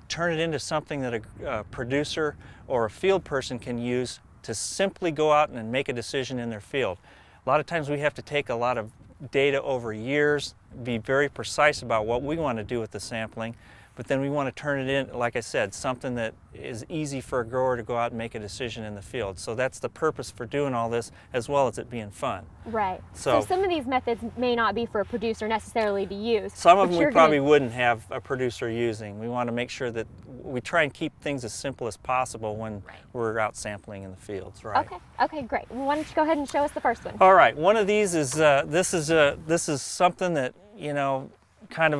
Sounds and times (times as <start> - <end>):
Speech: 7.6 - 36.4, 37.0 - 42.0.